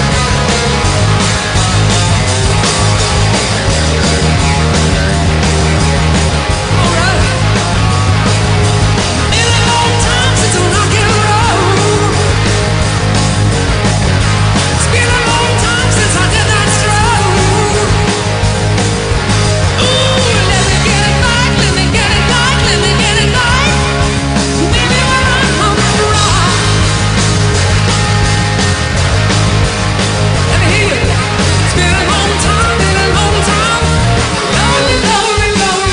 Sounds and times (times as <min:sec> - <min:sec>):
Rock and roll: 0:00.0 - 0:35.9.